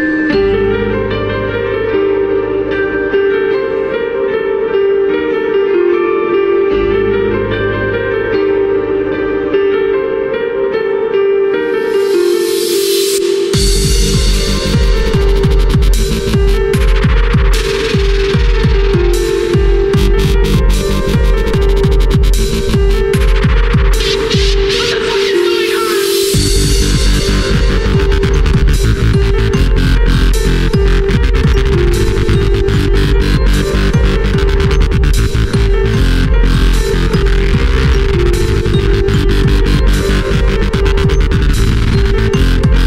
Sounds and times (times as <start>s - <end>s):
Dubstep: 11.8s - 42.8s.